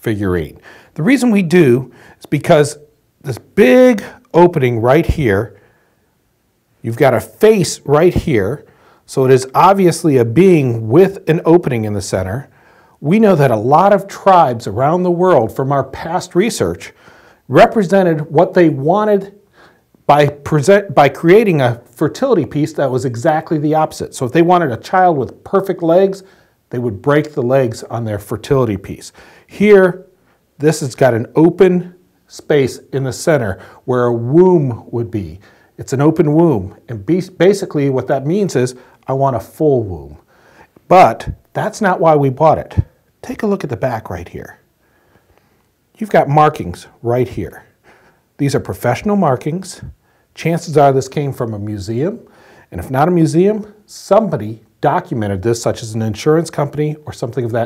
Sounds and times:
Speech: 0.0s - 5.6s, 6.8s - 19.4s, 20.1s - 40.3s, 40.9s - 44.7s, 46.0s - 47.8s, 48.4s - 57.6s.

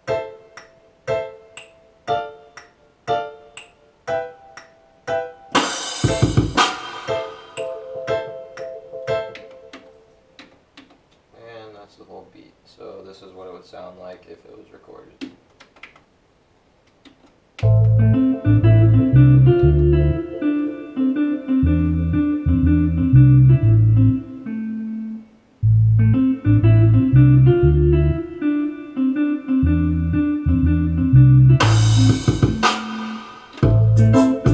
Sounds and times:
Piano: 0.0s - 10.5s, 17.6s - 25.2s, 26.0s - 34.5s
Inside, small room: 0.0s - 34.5s.

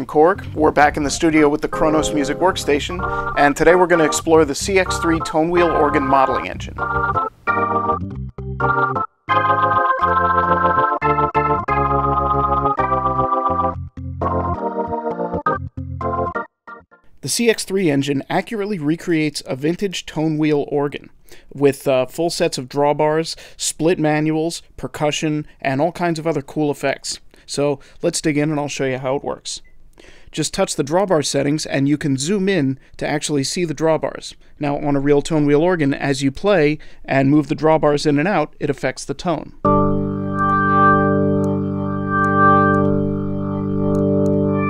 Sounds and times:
Speech: 0.0s - 6.8s, 17.2s - 29.6s, 30.3s - 39.6s.

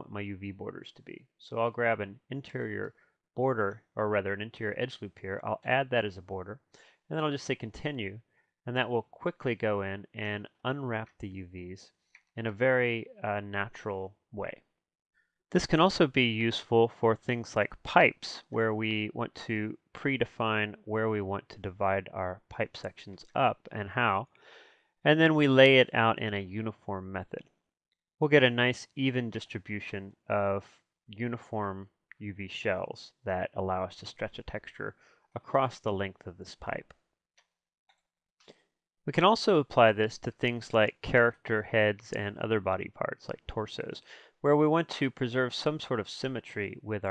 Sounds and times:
Speech: 0.0s - 14.6s, 15.5s - 24.3s, 25.1s - 27.5s, 28.2s - 37.0s, 39.1s - 47.1s.

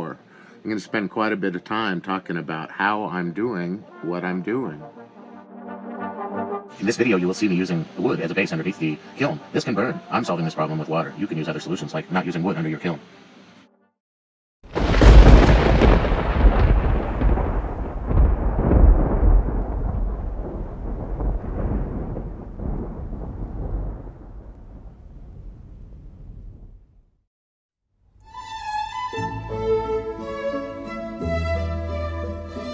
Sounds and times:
Speech: 0.0s - 4.8s, 6.8s - 13.0s.

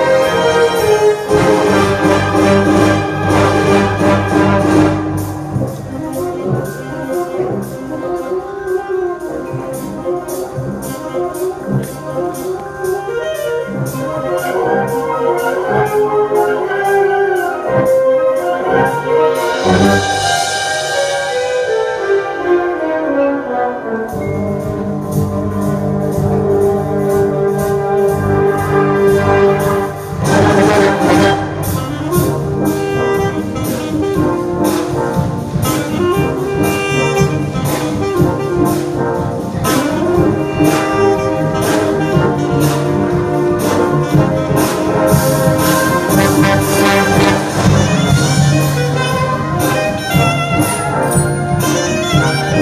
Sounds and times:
Orchestra: 0.0s - 52.6s.

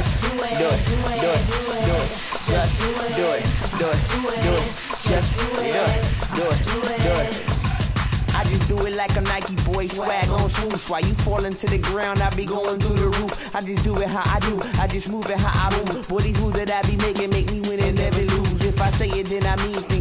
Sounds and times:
Rhythm and blues: 0.0s - 20.0s.

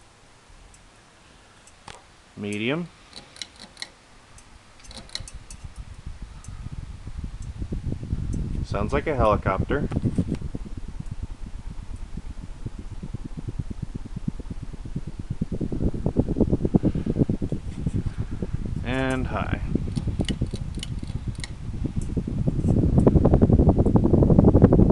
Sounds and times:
Speech: 2.4s - 2.9s, 8.6s - 9.9s, 18.8s - 19.7s.

